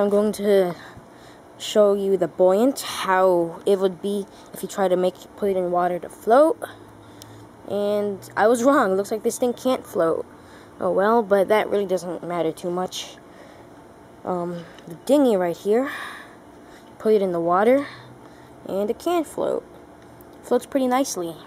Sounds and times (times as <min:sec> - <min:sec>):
Speech: 0:00.0 - 0:00.9, 0:01.6 - 0:06.8, 0:07.7 - 0:10.2, 0:10.8 - 0:13.2, 0:14.2 - 0:16.0, 0:17.0 - 0:18.0, 0:18.7 - 0:19.6, 0:20.4 - 0:21.4.